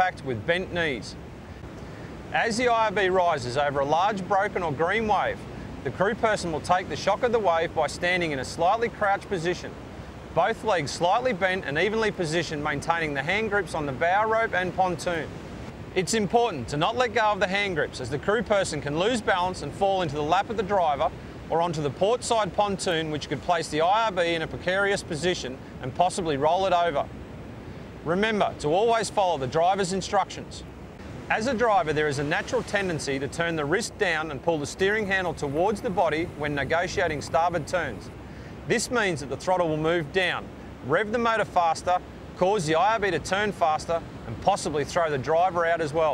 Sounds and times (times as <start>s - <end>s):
Speech: 0.0s - 1.2s, 2.3s - 9.8s, 10.4s - 15.3s, 16.0s - 27.1s, 28.0s - 30.7s, 31.3s - 38.1s, 38.7s - 46.1s
Boat, Water vehicle: 0.0s - 46.1s.